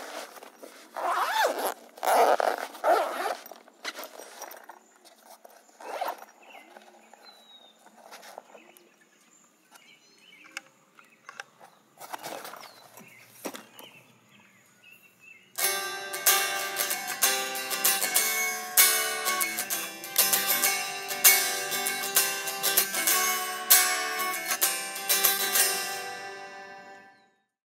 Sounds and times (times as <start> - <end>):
Music: 15.6 - 27.4.